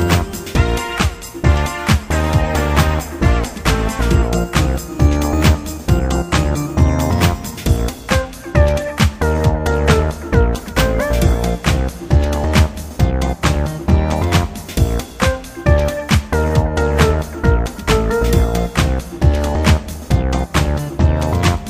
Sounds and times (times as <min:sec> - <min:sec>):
Music: 0:00.0 - 0:21.7.